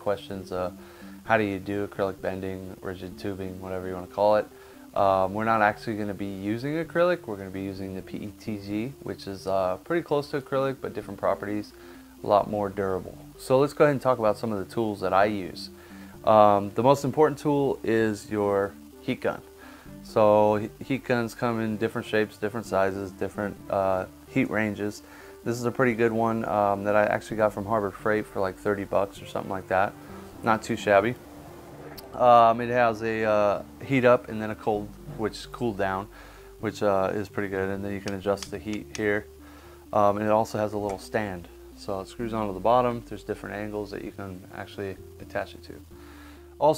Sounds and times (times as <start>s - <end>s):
Speech: 0.0s - 15.7s, 16.3s - 19.4s, 20.0s - 31.2s, 32.2s - 39.3s, 40.0s - 45.8s
Music: 0.0s - 46.7s.